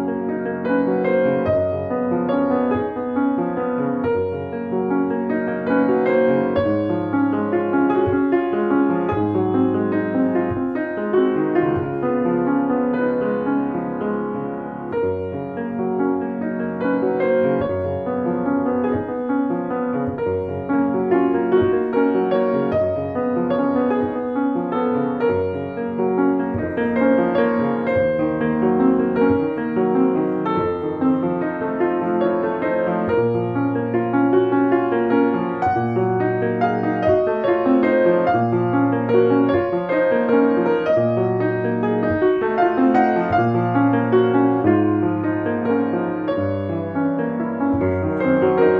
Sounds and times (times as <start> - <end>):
Classical music: 0.0 - 48.7.